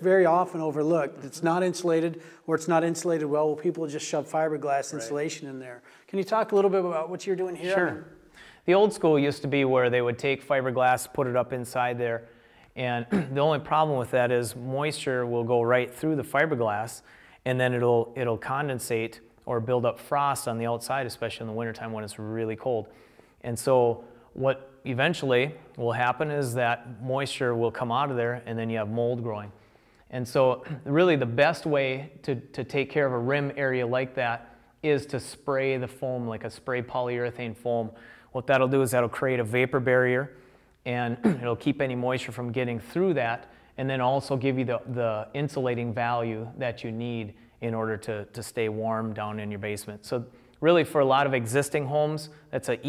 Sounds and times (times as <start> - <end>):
Speech: 0.0 - 40.3, 40.9 - 52.8.